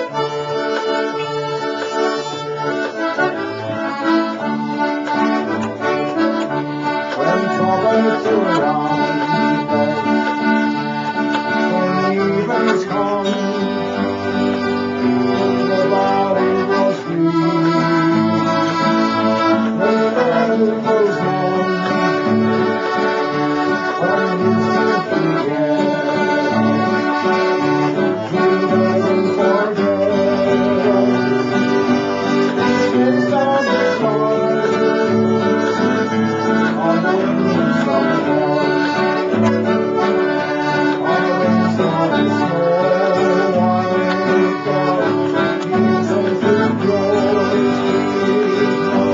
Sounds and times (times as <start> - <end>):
Music: 0.0 - 49.1.